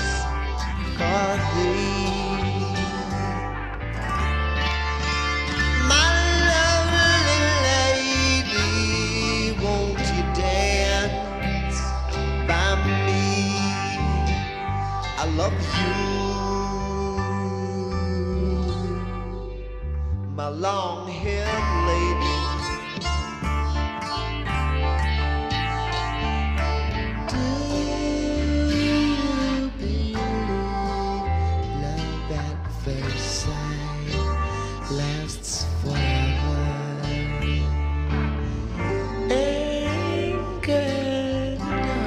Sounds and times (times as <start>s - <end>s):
Psychedelic rock: 0.0s - 42.0s.